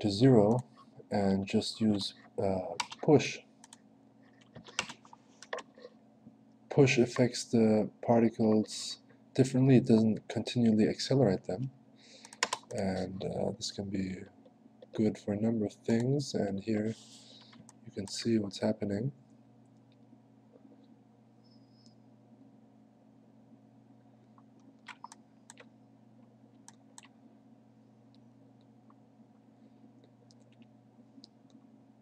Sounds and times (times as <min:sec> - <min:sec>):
Speech: 0:00.0 - 0:03.5, 0:06.7 - 0:11.8, 0:12.7 - 0:14.4, 0:15.0 - 0:17.1, 0:17.9 - 0:19.2.